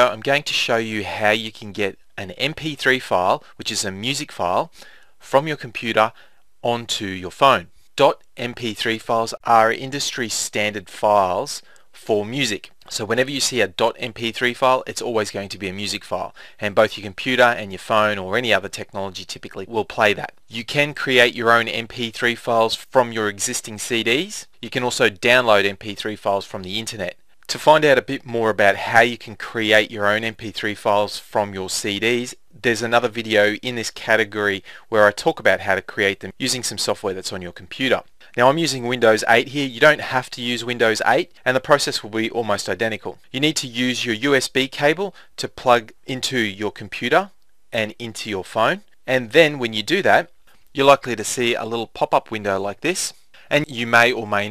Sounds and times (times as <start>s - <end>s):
Speech: 0.0s - 54.5s.